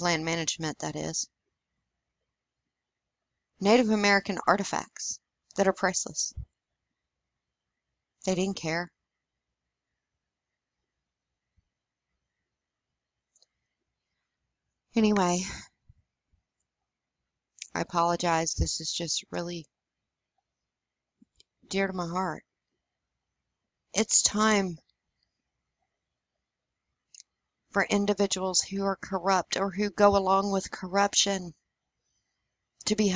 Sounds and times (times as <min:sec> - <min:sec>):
Speech: 0:00.0 - 0:01.3, 0:03.6 - 0:06.4, 0:08.3 - 0:08.9, 0:15.0 - 0:15.6, 0:17.6 - 0:19.7, 0:21.7 - 0:22.4, 0:24.0 - 0:24.8, 0:27.8 - 0:31.5, 0:32.8 - 0:33.1.